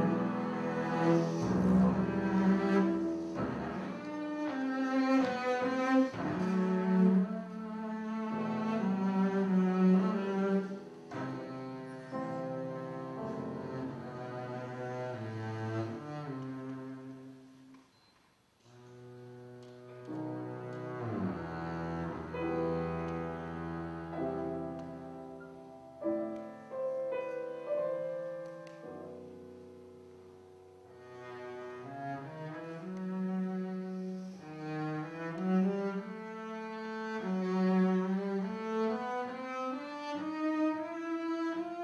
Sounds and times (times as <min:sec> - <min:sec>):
Cello: 0:00.0 - 0:41.8.